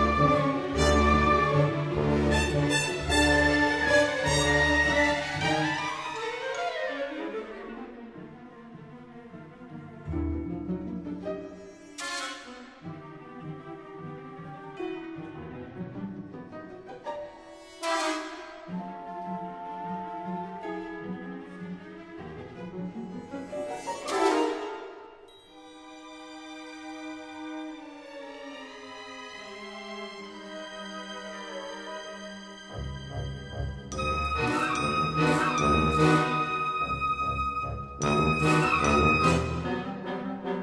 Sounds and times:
Theme music: 0:00.0 - 0:07.5, 0:08.6 - 0:21.9, 0:27.8 - 0:40.6.

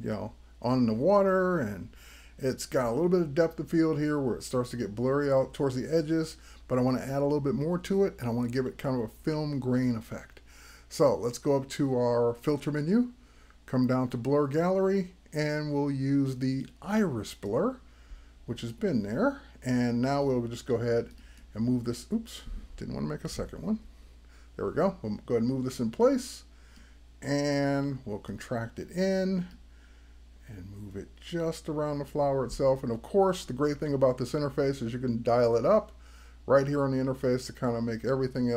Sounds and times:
Speech: 0:00.0 - 0:17.8, 0:18.5 - 0:23.9, 0:24.6 - 0:26.5, 0:27.2 - 0:29.6, 0:30.4 - 0:38.5.

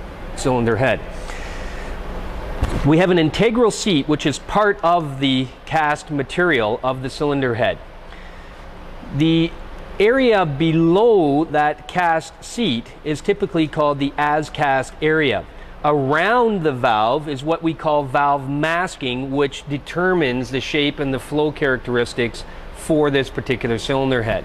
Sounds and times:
Speech: 0:00.4 - 0:01.1, 0:02.8 - 0:07.8, 0:09.0 - 0:24.4.

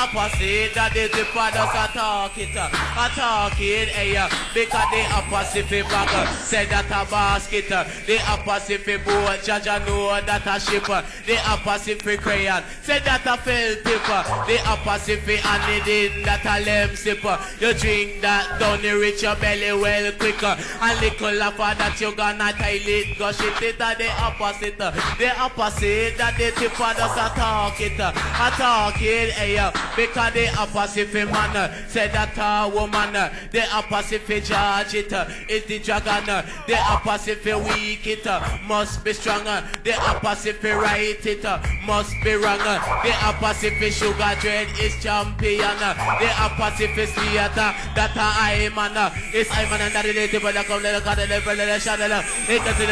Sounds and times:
Music: 0:00.0 - 0:52.9.

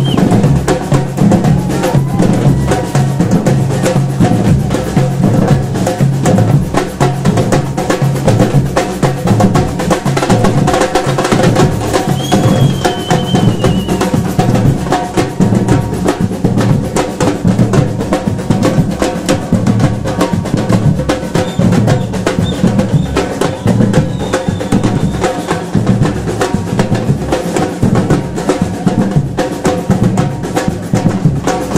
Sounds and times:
Percussion: 0:00.0 - 0:31.7.

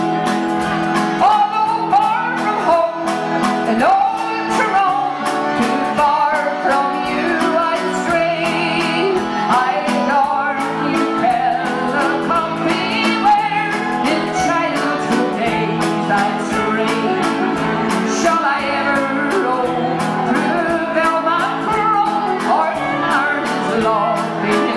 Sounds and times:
Music: 0:00.0 - 0:24.7.

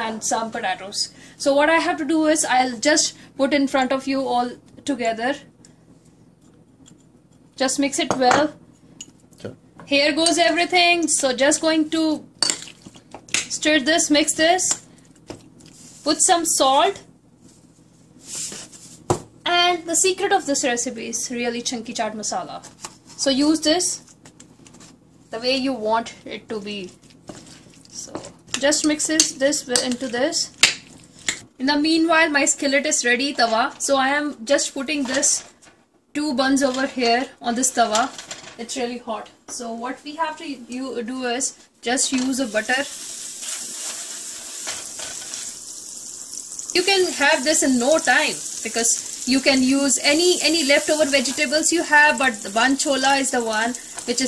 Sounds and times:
Frying (food): 0:42.1 - 0:54.2
Sizzle: 0:42.4 - 0:54.2.

